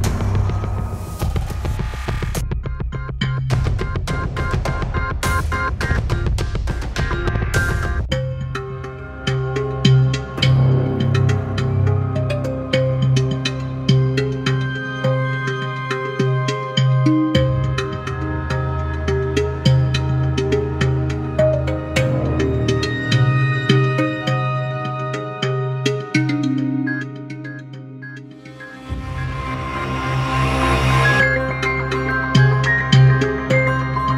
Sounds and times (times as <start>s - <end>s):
Music: 0.0s - 34.1s.